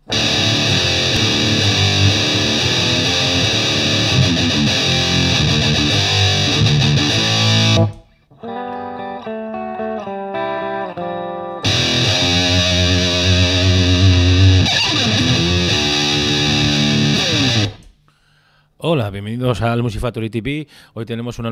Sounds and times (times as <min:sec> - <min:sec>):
Guitar: 0:00.0 - 0:18.0.